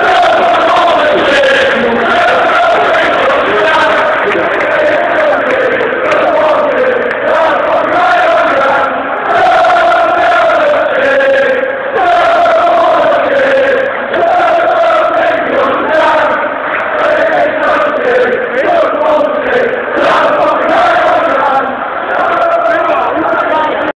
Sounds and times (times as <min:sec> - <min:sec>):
Speech: 0:22.6 - 0:23.9.